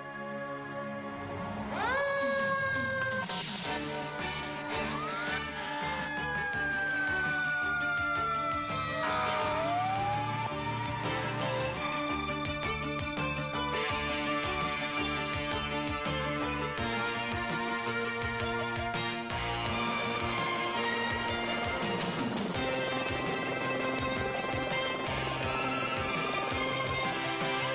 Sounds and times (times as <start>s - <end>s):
Music: 0.0s - 27.7s.